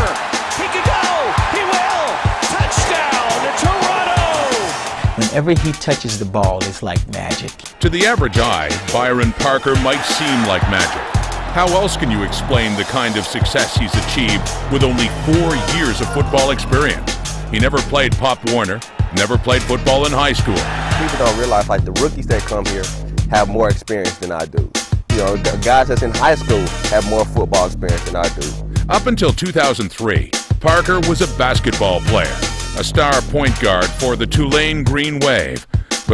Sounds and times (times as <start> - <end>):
Speech: 0.0 - 11.0, 11.6 - 36.1
Music: 0.0 - 36.1.